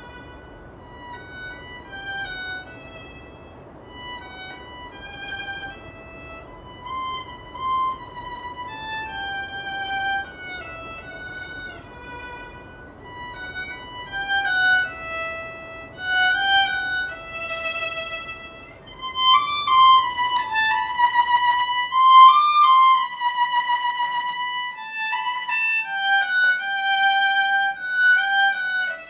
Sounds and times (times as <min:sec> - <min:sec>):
Violin, fiddle: 0:00.0 - 0:29.0.